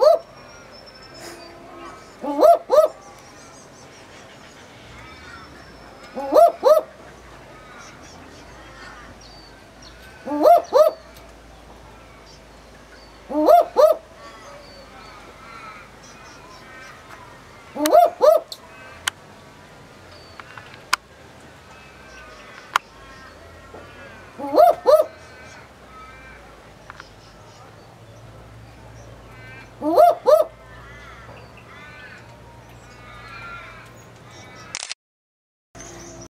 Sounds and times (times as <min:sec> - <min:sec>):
Owl: 0:00.0 - 0:07.0, 0:09.8 - 0:11.2, 0:13.3 - 0:17.0, 0:17.7 - 0:19.0, 0:22.0 - 0:26.5, 0:29.3 - 0:32.3.